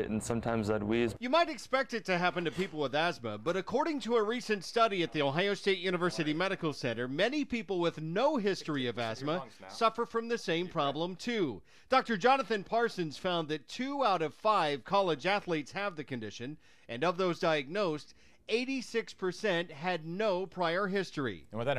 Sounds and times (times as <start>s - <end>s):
Speech: 0.0s - 21.7s.